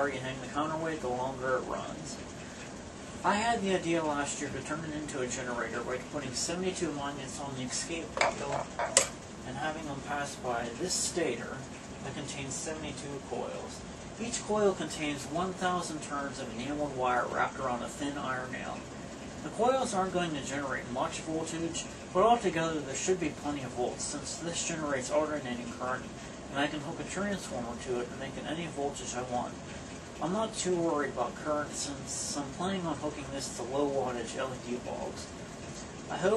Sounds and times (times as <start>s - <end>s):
Speech: 0.0s - 2.3s, 3.2s - 29.6s, 30.2s - 35.4s, 36.1s - 36.3s.